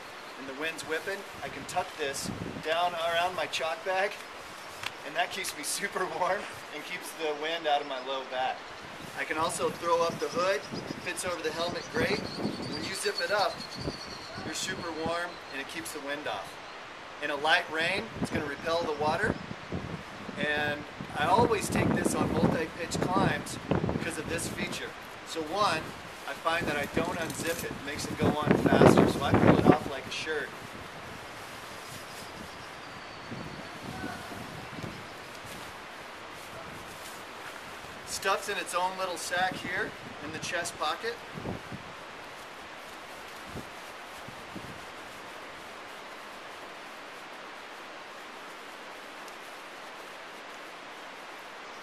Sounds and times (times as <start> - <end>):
Speech: 5.0 - 8.6, 14.3 - 16.5, 20.4 - 30.5, 38.1 - 41.2.